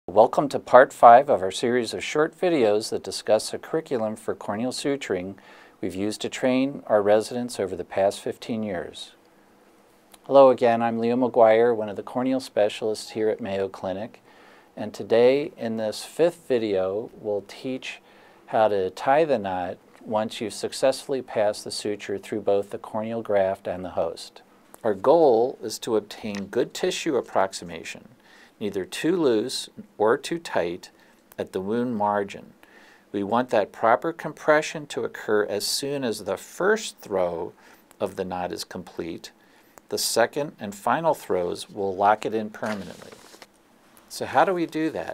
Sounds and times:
Speech: 0.0 - 9.2, 10.2 - 14.2, 14.8 - 43.4, 44.1 - 45.1.

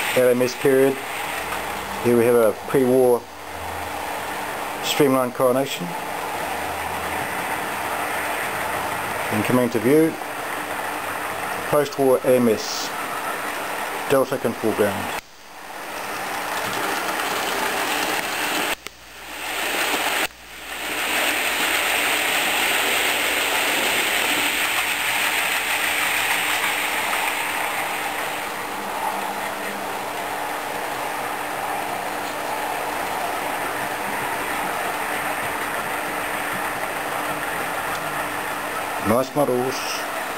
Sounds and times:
Speech: 0.2 - 1.0, 2.0 - 3.3, 4.8 - 6.0, 9.3 - 10.2, 11.7 - 13.0, 14.1 - 15.2, 39.0 - 40.1.

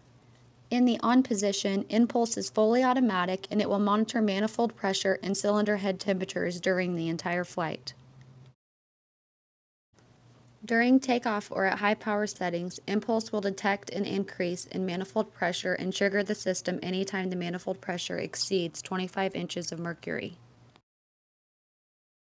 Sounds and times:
Speech: 0.7 - 8.0, 10.6 - 20.4.

